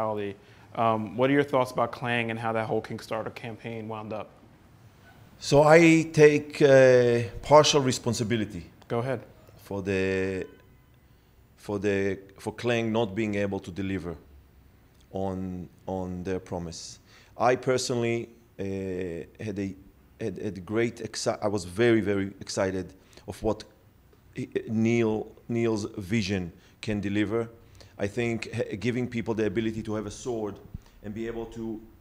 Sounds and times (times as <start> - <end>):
Speech: 0.0 - 4.3, 5.4 - 10.6, 11.6 - 14.2, 15.1 - 23.8, 24.4 - 32.0.